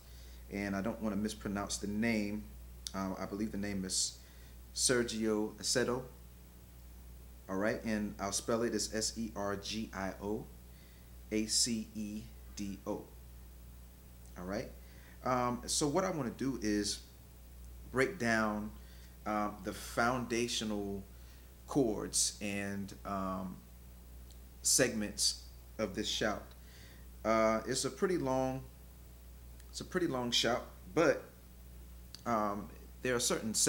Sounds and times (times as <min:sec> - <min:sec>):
Speech: 0:00.5 - 0:04.2, 0:04.8 - 0:06.2, 0:07.5 - 0:10.5, 0:11.3 - 0:13.2, 0:14.4 - 0:17.1, 0:17.9 - 0:21.1, 0:21.7 - 0:23.6, 0:24.6 - 0:26.6, 0:27.2 - 0:28.7, 0:29.7 - 0:31.4, 0:32.2 - 0:33.6.